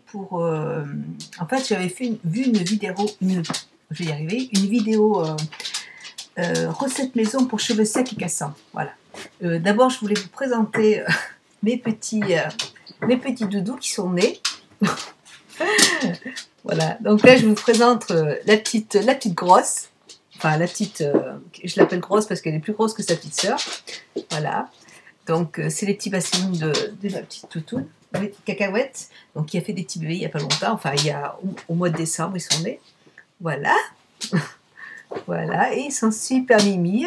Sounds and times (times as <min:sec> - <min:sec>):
Speech: 0:00.0 - 0:37.0.